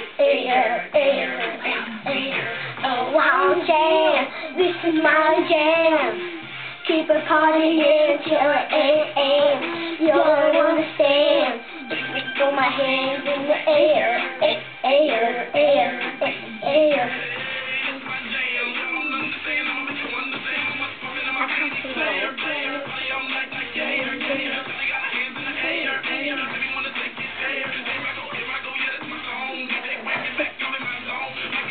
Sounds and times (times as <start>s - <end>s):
Child singing: 0.0s - 18.3s, 21.7s - 26.7s
Music: 0.0s - 31.7s.